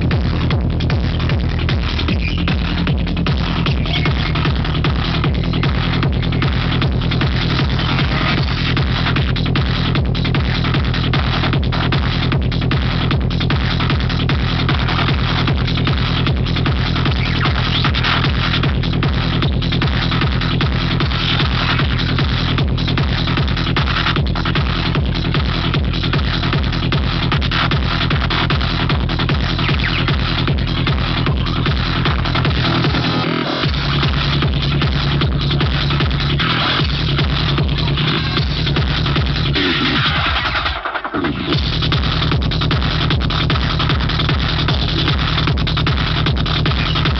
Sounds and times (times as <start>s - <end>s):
Vibration: 0.0s - 40.0s
Music: 0.0s - 47.1s.